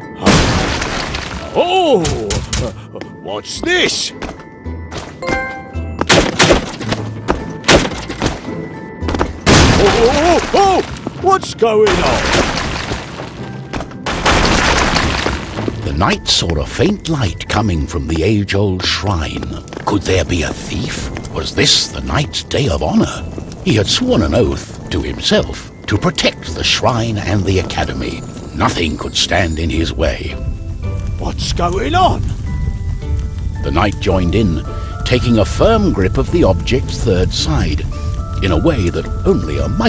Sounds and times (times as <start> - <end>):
Music: 0.0 - 39.8
Speech: 1.4 - 4.2, 9.8 - 12.3, 15.8 - 30.4, 31.2 - 32.3, 33.6 - 37.8, 38.4 - 39.8.